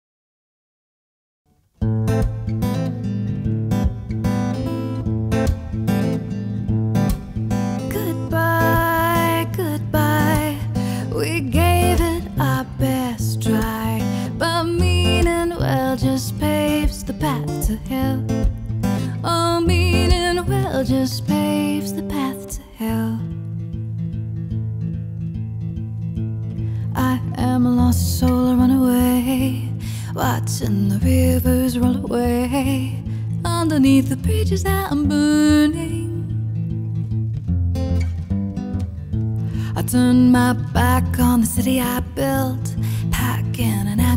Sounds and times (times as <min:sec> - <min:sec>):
Music: 0:01.5 - 0:44.1.